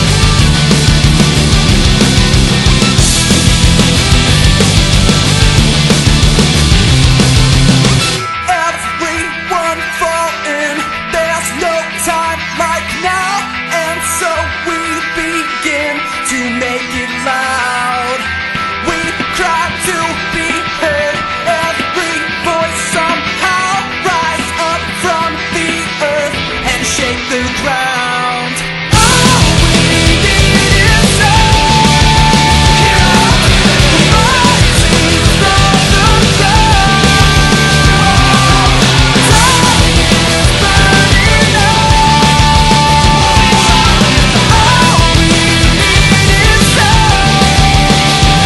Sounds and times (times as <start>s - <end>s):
Music: 0.0s - 48.4s.